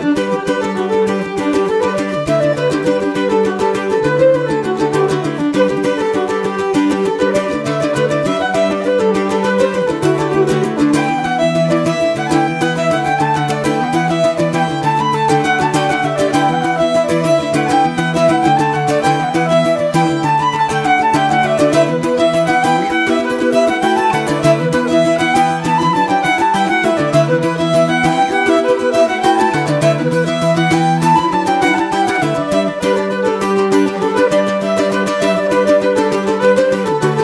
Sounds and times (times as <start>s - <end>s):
Music: 0.0s - 37.2s.